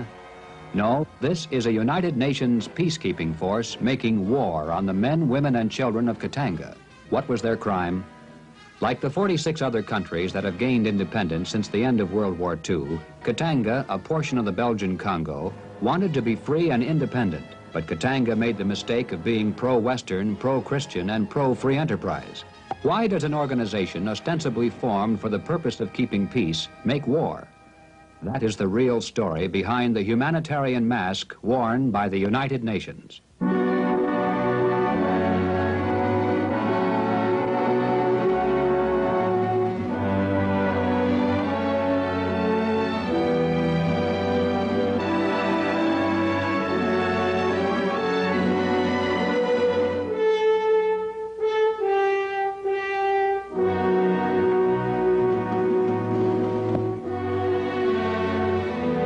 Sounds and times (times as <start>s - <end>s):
Music: 0.0s - 59.0s
Speech: 0.8s - 8.1s, 8.8s - 27.5s, 28.2s - 33.3s.